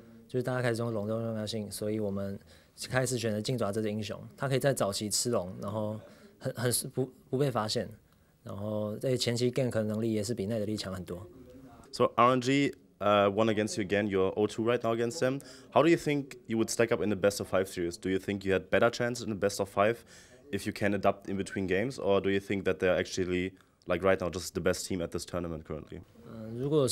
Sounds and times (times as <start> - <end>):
Speech: 0.3 - 26.9.